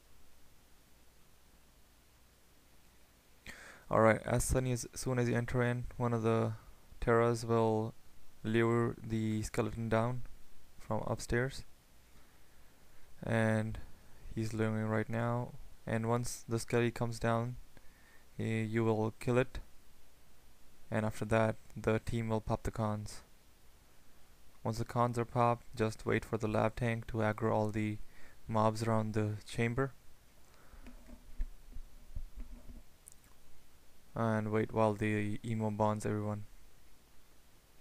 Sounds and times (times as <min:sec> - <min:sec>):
Narration, monologue: 0:02.9 - 0:37.8.